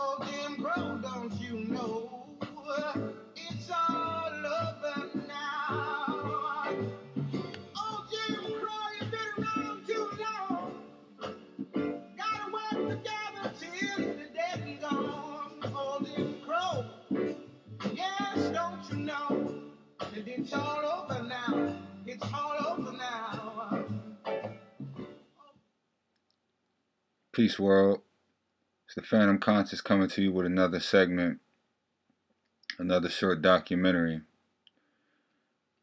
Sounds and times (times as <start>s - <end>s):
Music: 0.0s - 25.6s
Speech: 27.4s - 28.0s, 28.9s - 31.4s, 32.7s - 34.3s.